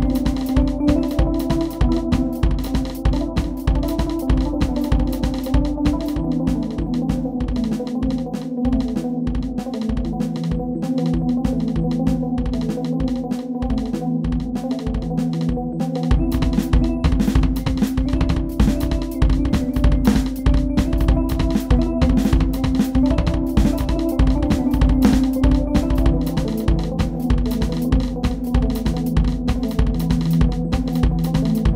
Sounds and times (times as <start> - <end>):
Bass drum: 16.1 - 31.7
Snare drum: 16.1 - 31.7.